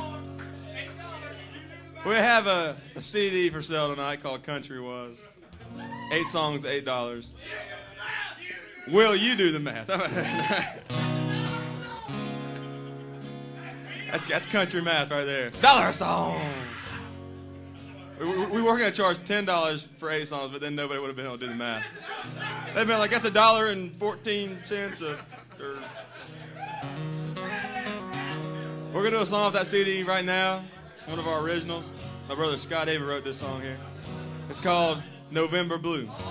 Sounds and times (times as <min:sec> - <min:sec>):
Music: 0:00.0 - 0:04.7, 0:05.5 - 0:06.8, 0:10.0 - 0:20.7, 0:22.0 - 0:36.3
Speech: 0:00.0 - 0:05.4, 0:06.1 - 0:10.0, 0:13.6 - 0:16.7, 0:18.0 - 0:25.9, 0:29.0 - 0:33.9, 0:34.5 - 0:36.3.